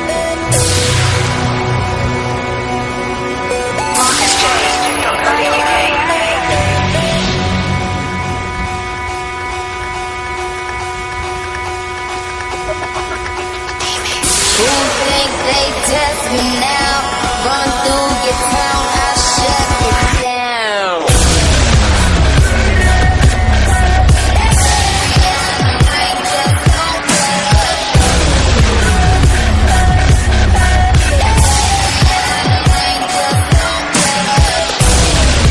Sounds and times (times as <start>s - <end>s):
Dubstep: 0.0s - 11.3s, 12.0s - 35.5s.